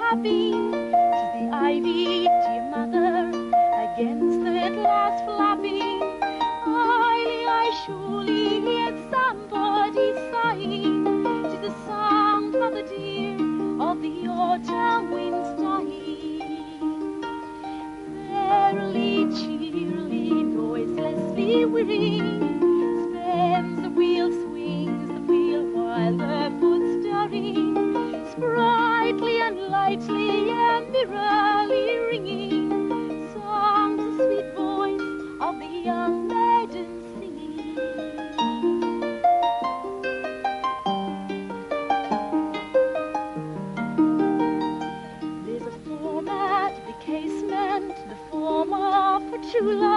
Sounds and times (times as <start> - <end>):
Harp: 0.0 - 49.9
Pizzicato: 0.0 - 49.9.